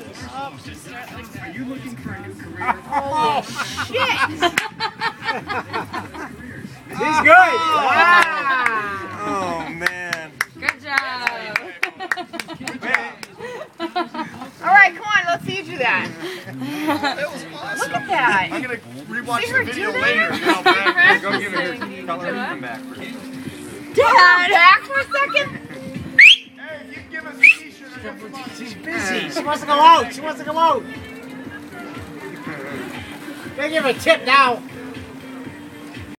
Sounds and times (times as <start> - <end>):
Music: 0.0 - 36.1.